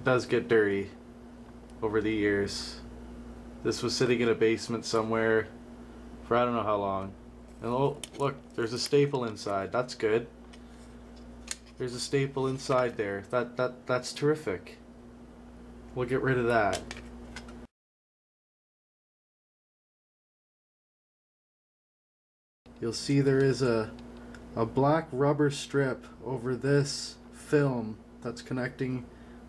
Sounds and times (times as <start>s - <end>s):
Speech: 0.0s - 1.0s, 1.8s - 2.9s, 3.6s - 5.6s, 6.2s - 10.3s, 11.8s - 14.8s, 15.9s - 16.9s, 22.8s - 24.0s, 24.6s - 29.1s
Inside, small room: 0.0s - 17.7s, 22.7s - 29.4s.